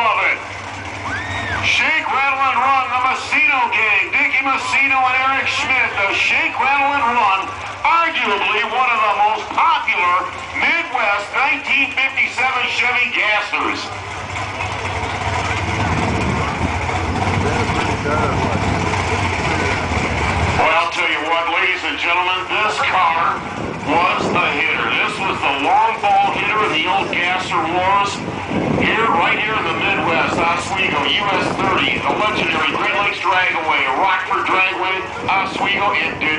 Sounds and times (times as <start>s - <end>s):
Speech: 0.0s - 0.4s, 1.6s - 13.9s, 17.3s - 19.9s, 20.6s - 28.2s, 28.8s - 36.3s.